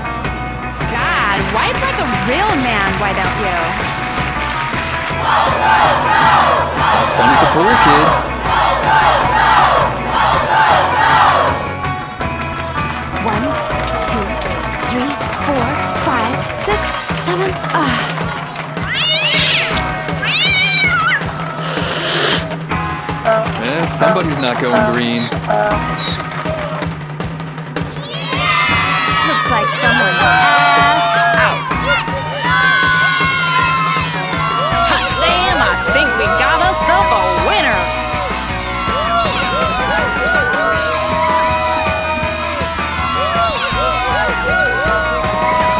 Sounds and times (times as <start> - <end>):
Music: 0.0 - 45.7
Speech: 23.3 - 25.8.